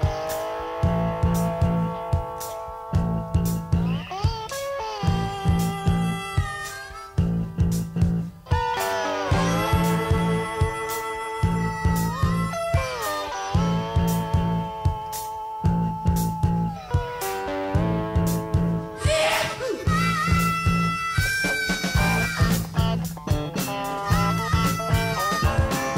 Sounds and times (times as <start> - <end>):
Music: 0.0 - 25.9.